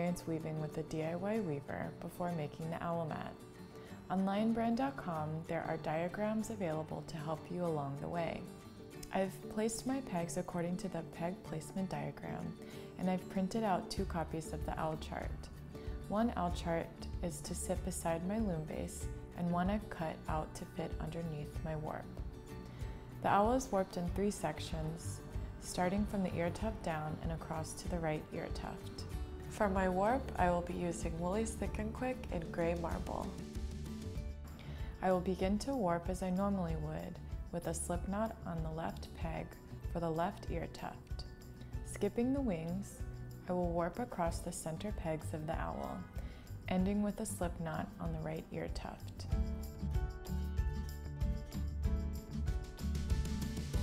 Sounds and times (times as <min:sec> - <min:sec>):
Speech: 0:00.0 - 0:03.4, 0:04.1 - 0:08.5, 0:09.1 - 0:15.5, 0:16.1 - 0:22.1, 0:23.2 - 0:33.4, 0:35.0 - 0:41.2, 0:41.9 - 0:46.1, 0:46.7 - 0:49.2
Music: 0:00.0 - 0:53.8.